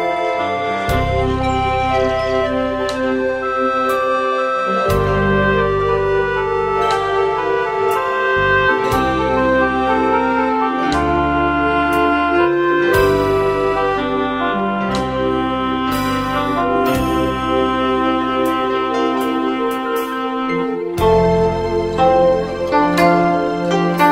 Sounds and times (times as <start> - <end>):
Music: 0.0 - 24.1.